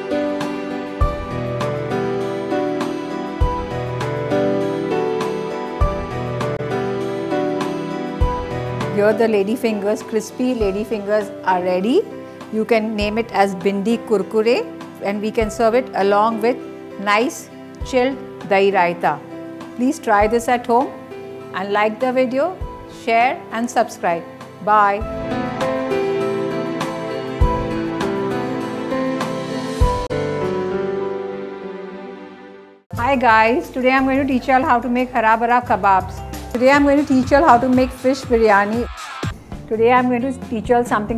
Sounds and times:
Music: 0.0s - 41.1s
Speech: 9.0s - 19.2s, 19.8s - 20.9s, 21.6s - 25.1s, 33.0s - 38.9s, 39.7s - 41.1s.

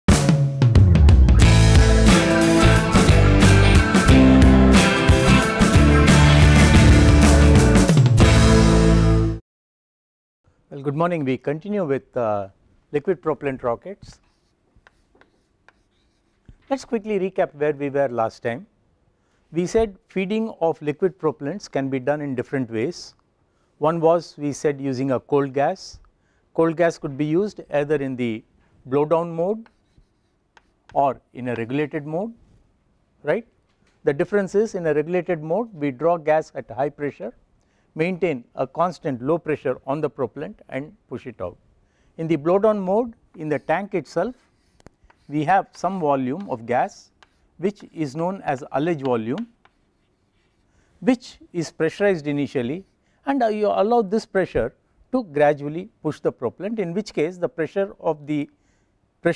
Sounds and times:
Speech: 10.7s - 14.2s, 16.7s - 18.7s, 19.5s - 23.2s, 23.8s - 26.0s, 26.6s - 29.7s, 30.9s - 32.4s, 33.2s - 37.4s, 38.0s - 41.6s, 42.2s - 44.4s, 45.3s - 49.6s, 51.0s - 58.6s.

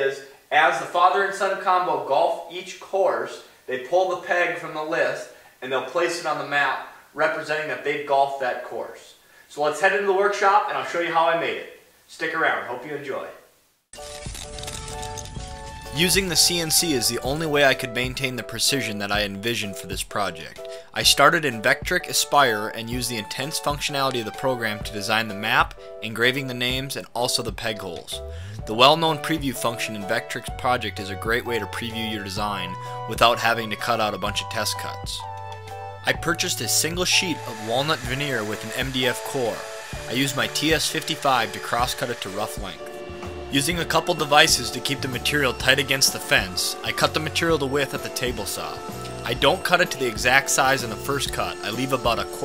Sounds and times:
Speech: 0.0s - 13.5s, 16.0s - 35.2s, 36.1s - 42.9s, 43.5s - 52.4s.

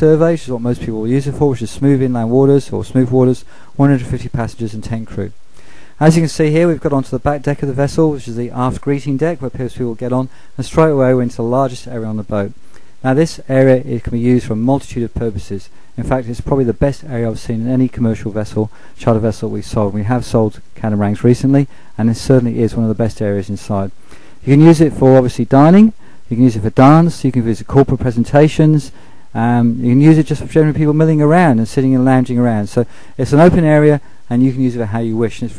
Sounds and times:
Speech: 0.0s - 5.4s, 6.0s - 35.5s.

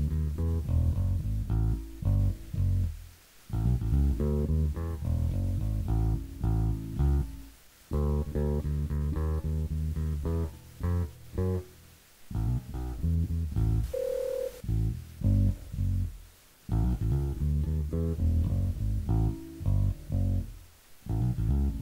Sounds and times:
Bass guitar: 0.0s - 14.0s, 14.6s - 21.8s
Telephone bell ringing: 13.9s - 14.6s.

